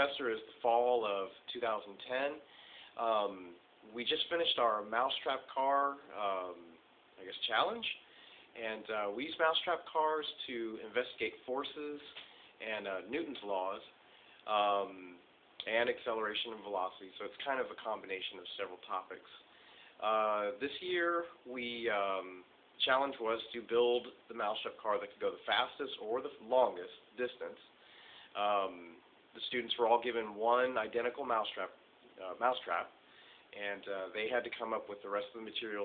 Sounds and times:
Speech: 0:00.0 - 0:08.0, 0:08.6 - 0:27.7, 0:28.4 - 0:35.8.

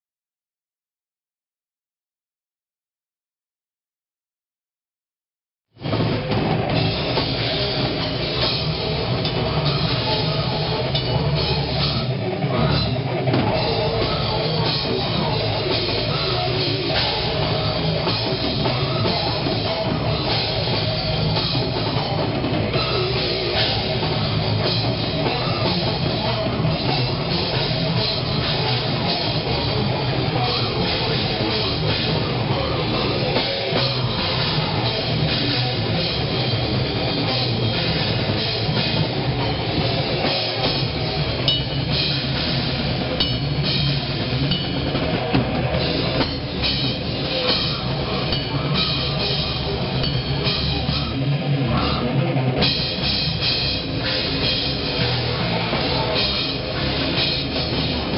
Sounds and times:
Drum: 0:05.8 - 0:58.1
Drum kit: 0:05.8 - 0:58.1
Heavy metal: 0:05.8 - 0:58.1.

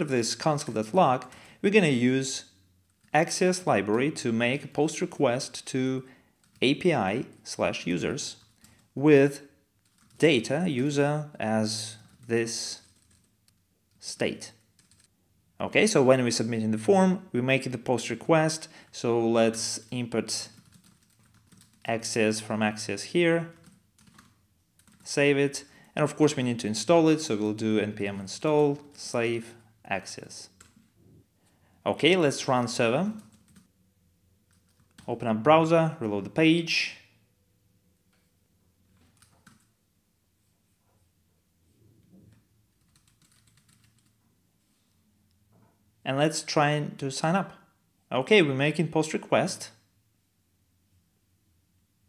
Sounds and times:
Speech: 0:00.0 - 0:02.5, 0:03.1 - 0:08.4, 0:09.0 - 0:09.5, 0:10.2 - 0:12.9, 0:14.0 - 0:14.6, 0:15.6 - 0:20.6, 0:21.8 - 0:23.6, 0:25.0 - 0:30.6, 0:31.8 - 0:33.3, 0:35.0 - 0:37.1, 0:46.0 - 0:49.9.

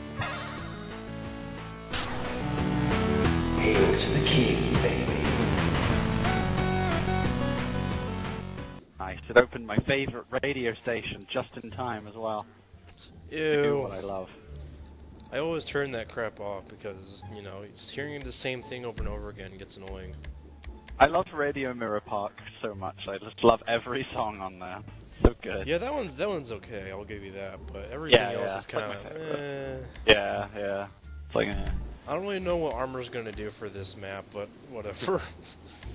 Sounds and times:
Speech: 0:03.6 - 0:05.5, 0:09.0 - 0:14.4, 0:15.3 - 0:20.2, 0:21.0 - 0:35.4.

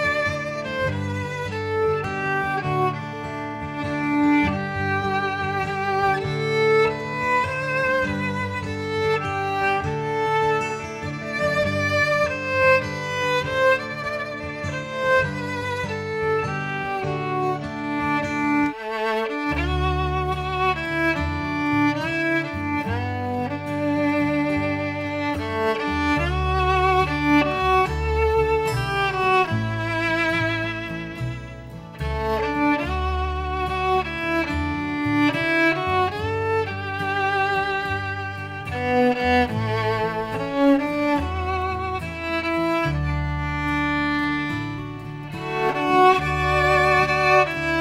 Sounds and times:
Violin, fiddle: 0:00.0 - 0:47.8.

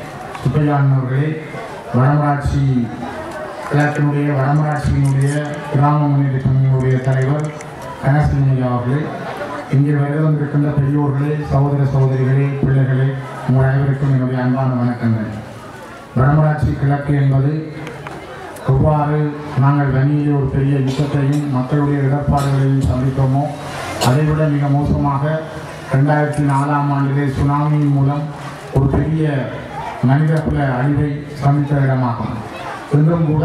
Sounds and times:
Narration, monologue: 0:00.0 - 0:33.4
Male speech, man speaking: 0:00.4 - 0:03.0, 0:03.7 - 0:15.4, 0:16.2 - 0:17.9, 0:18.6 - 0:33.4.

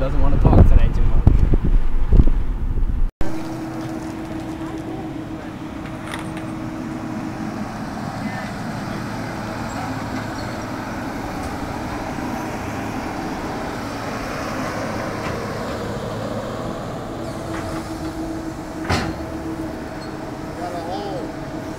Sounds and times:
Outside, urban or manmade: 0:00.0 - 0:21.7
Traffic noise, roadway noise: 0:00.0 - 0:21.7.

